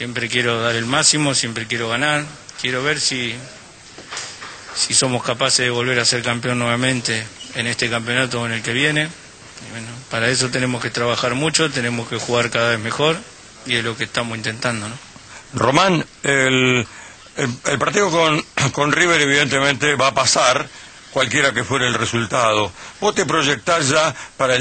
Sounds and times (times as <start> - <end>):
Speech: 0.0 - 3.8, 4.8 - 24.6.